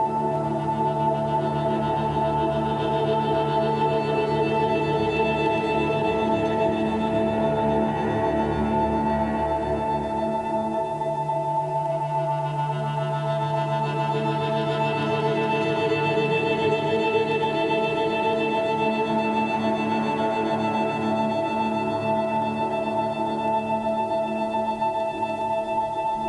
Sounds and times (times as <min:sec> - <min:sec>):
Independent music: 0:00.0 - 0:26.2.